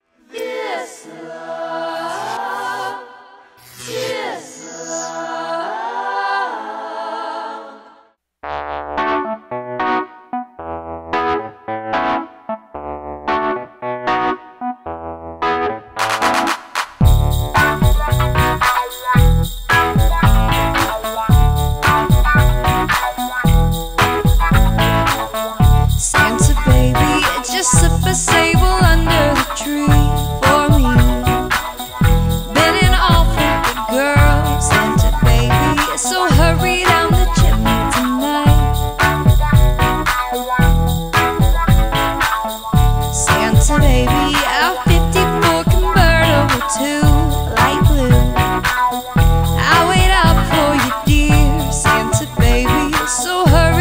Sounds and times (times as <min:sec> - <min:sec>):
Funk: 0:15.6 - 0:53.8.